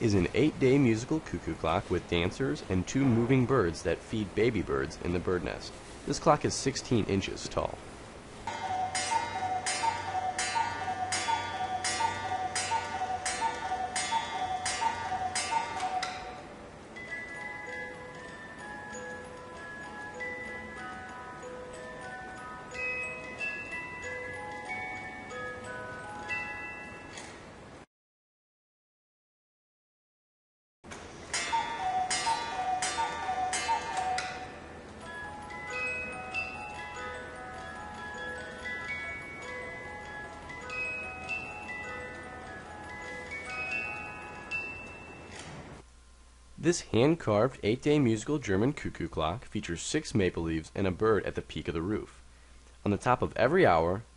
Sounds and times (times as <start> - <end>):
Music: 8.5 - 27.4, 31.4 - 45.6.